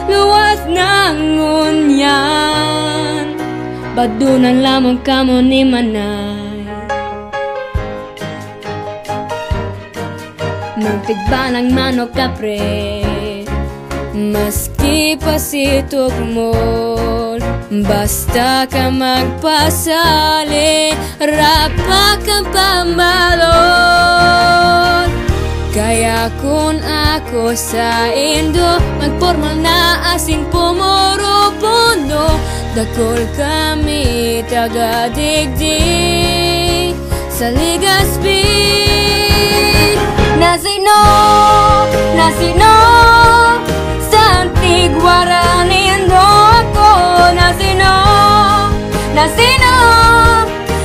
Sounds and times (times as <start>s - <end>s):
Music: 0.0s - 50.8s.